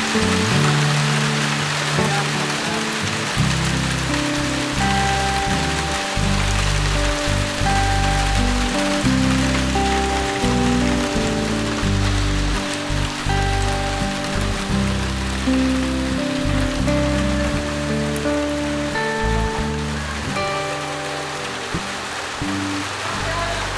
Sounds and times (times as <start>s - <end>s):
Rain on surface: 0.0s - 23.7s.